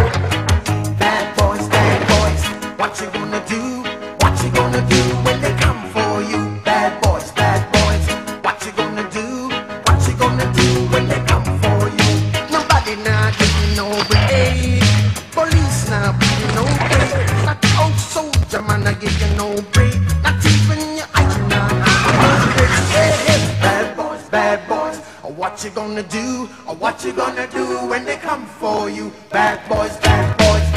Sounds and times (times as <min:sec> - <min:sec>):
Music: 0:00.0 - 0:30.7.